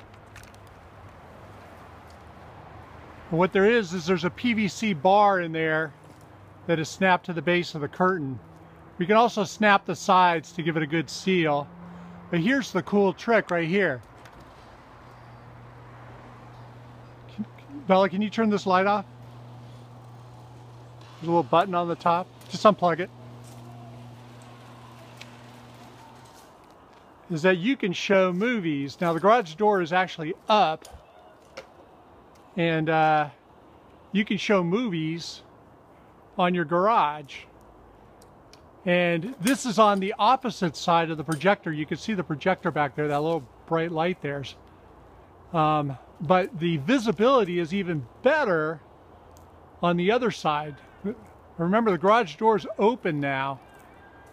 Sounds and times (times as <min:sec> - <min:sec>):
Speech: 0:03.3 - 0:06.0, 0:06.7 - 0:08.4, 0:09.0 - 0:11.7, 0:12.3 - 0:14.0, 0:17.3 - 0:19.1, 0:21.2 - 0:23.1, 0:27.3 - 0:30.8, 0:32.6 - 0:33.4, 0:34.2 - 0:35.5, 0:36.4 - 0:37.5, 0:38.9 - 0:44.6, 0:45.5 - 0:48.8, 0:49.8 - 0:53.8.